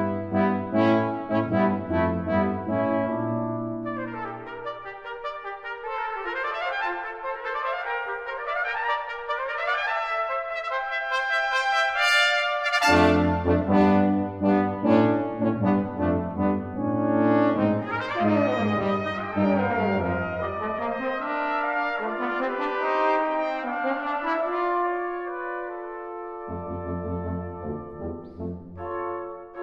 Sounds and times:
Brass instrument: 0.0s - 29.6s.

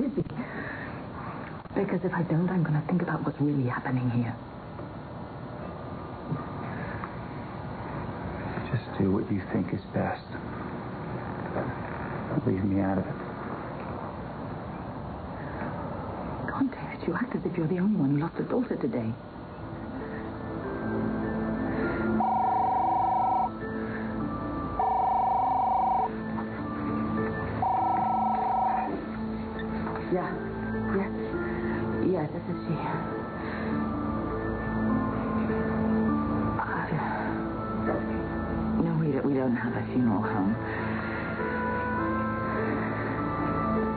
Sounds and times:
Television: 0.0s - 43.9s
Music: 18.4s - 43.9s.

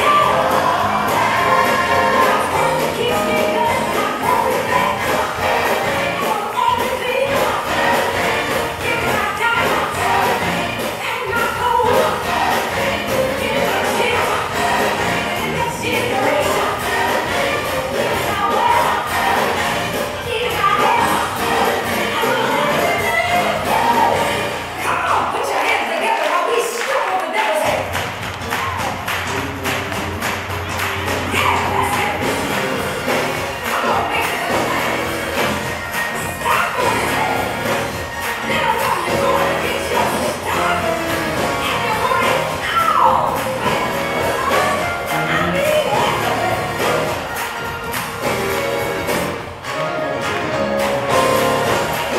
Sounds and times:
Singing: 0.0s - 28.9s, 31.3s - 49.8s
Gospel music: 0.0s - 52.1s.

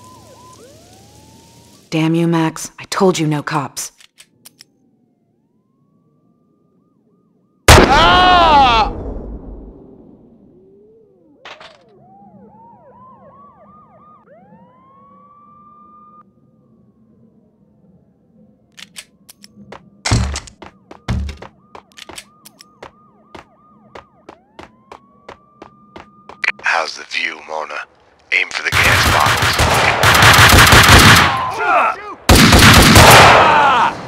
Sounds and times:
Speech: 26.5s - 29.4s.

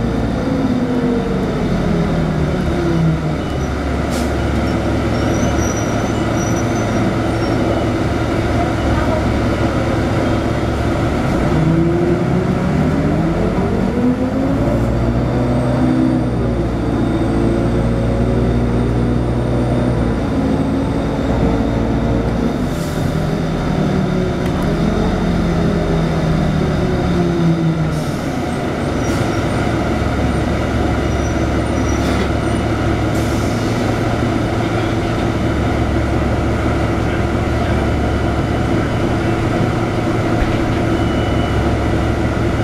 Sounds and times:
Bus: 0.0s - 42.6s
Outside, urban or manmade: 0.0s - 42.6s.

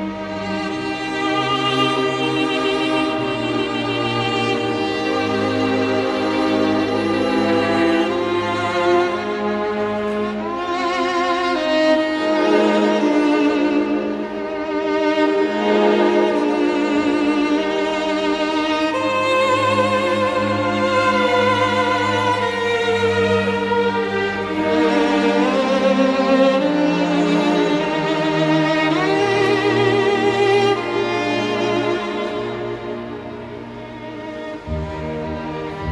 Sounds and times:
Violin, fiddle: 0.0s - 35.9s.

